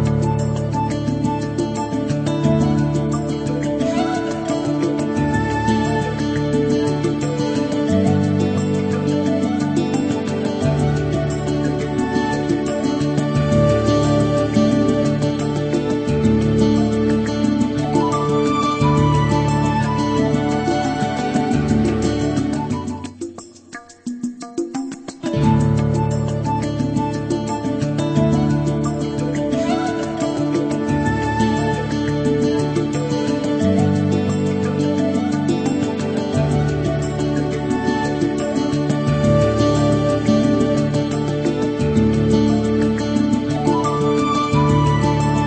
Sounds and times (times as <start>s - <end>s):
Music: 0.0s - 45.4s.